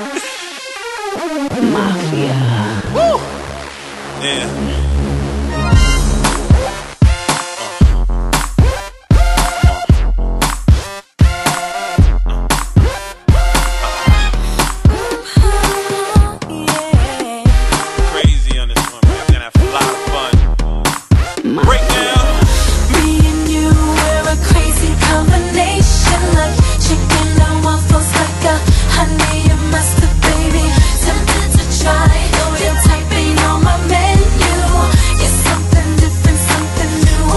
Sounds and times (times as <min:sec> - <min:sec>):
Music: 0:00.0 - 0:37.3.